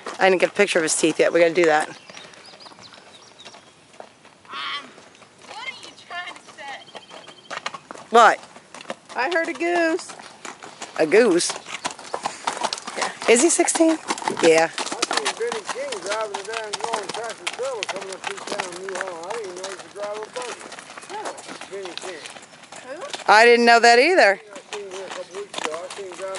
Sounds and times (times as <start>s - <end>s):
Horse: 0.0s - 26.3s
Outside, rural or natural: 0.0s - 26.3s.